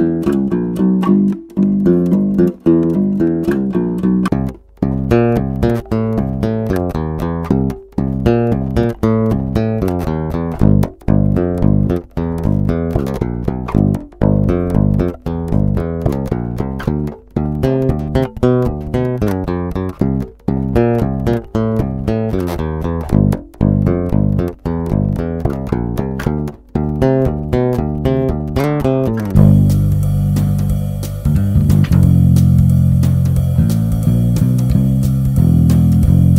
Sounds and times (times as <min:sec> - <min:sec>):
Music: 0:00.0 - 0:36.3.